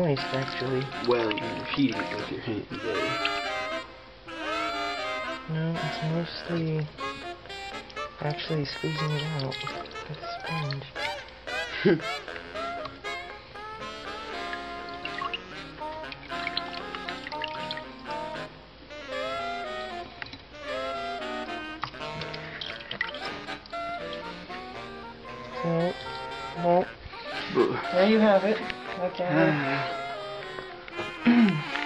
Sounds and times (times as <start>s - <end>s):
Speech: 0.0s - 3.2s, 5.5s - 6.9s, 8.2s - 10.9s
Inside, small room: 0.0s - 31.8s
Music: 0.0s - 31.8s
Water: 0.0s - 31.8s.